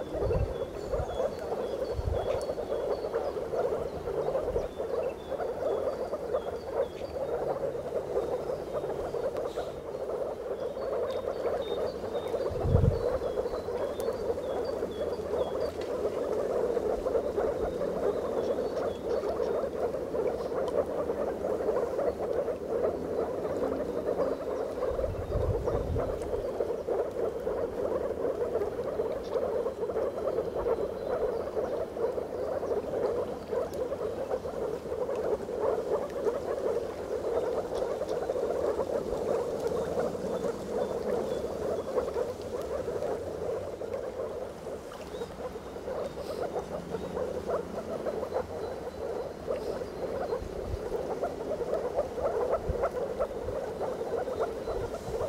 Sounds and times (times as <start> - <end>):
Frog: 0.0 - 55.2.